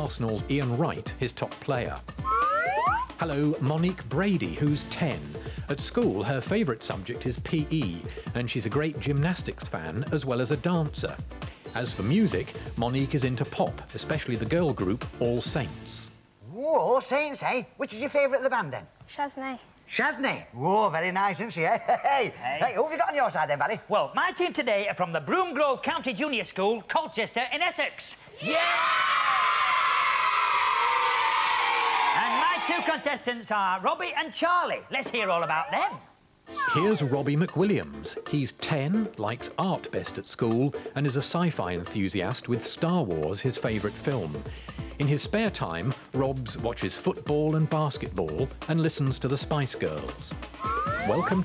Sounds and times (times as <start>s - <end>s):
Speech: 0.0s - 2.0s, 3.2s - 11.2s, 11.8s - 18.9s, 19.9s - 28.2s, 32.2s - 36.1s, 36.8s - 44.4s, 45.0s - 50.4s
Music: 0.0s - 16.2s, 36.4s - 51.4s.